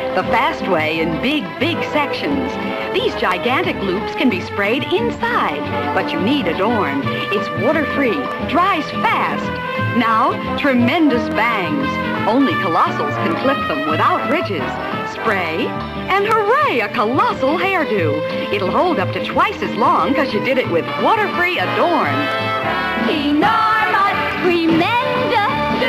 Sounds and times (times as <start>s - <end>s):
Music: 0.0s - 25.8s
Speech: 0.2s - 22.2s.